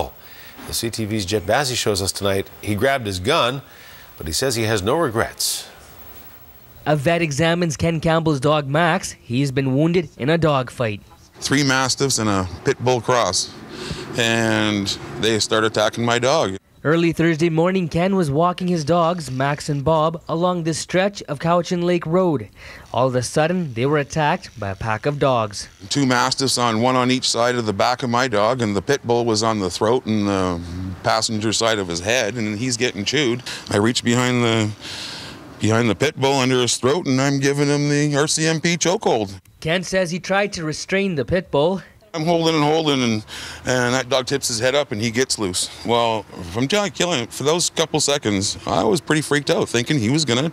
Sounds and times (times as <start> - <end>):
Speech: 0.0 - 5.7, 6.9 - 13.5, 14.2 - 34.8, 35.6 - 50.5.